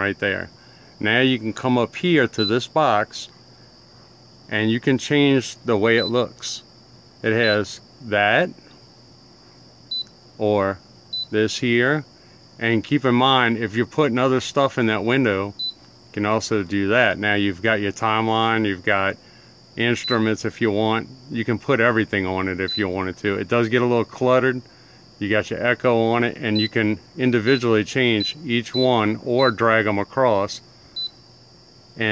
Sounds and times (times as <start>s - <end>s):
Speech: 0.0s - 3.3s, 4.5s - 6.6s, 7.2s - 8.6s, 10.4s - 12.0s, 12.6s - 15.6s, 16.2s - 19.2s, 19.8s - 24.6s, 25.2s - 30.6s.